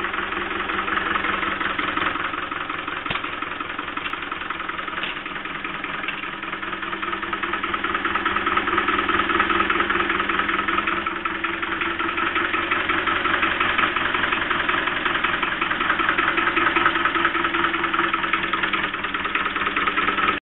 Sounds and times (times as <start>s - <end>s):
Idling: 0.0s - 20.4s
Medium engine (mid frequency): 0.0s - 20.4s.